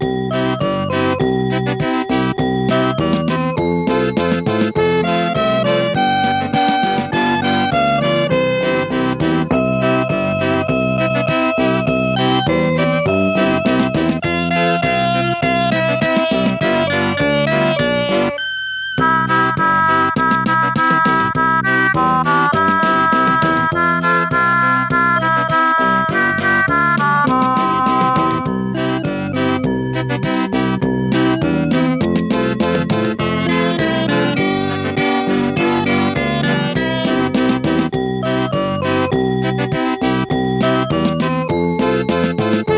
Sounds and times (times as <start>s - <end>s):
Music: 0.0s - 42.7s.